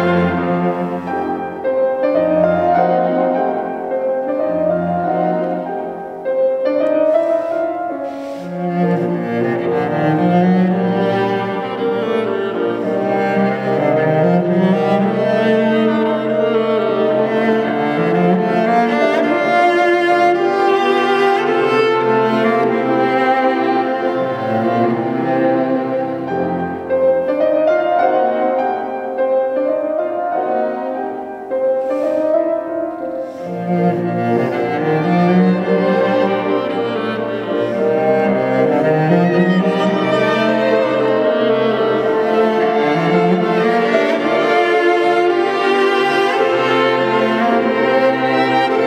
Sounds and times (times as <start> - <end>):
Cello: 0.0 - 48.8
Orchestra: 0.0 - 48.8
Piano: 0.0 - 48.8
Violin, fiddle: 0.0 - 48.8.